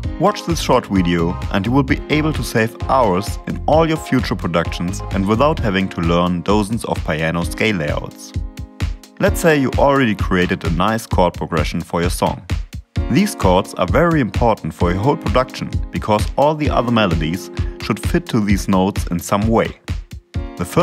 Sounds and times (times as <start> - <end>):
Music: 0.0 - 20.8
Speech: 0.1 - 8.4, 9.2 - 12.5, 13.1 - 19.8, 20.6 - 20.8.